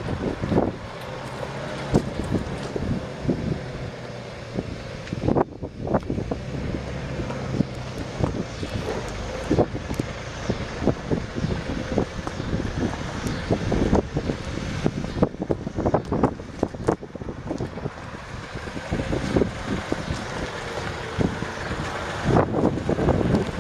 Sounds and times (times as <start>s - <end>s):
Truck: 0.0s - 23.6s.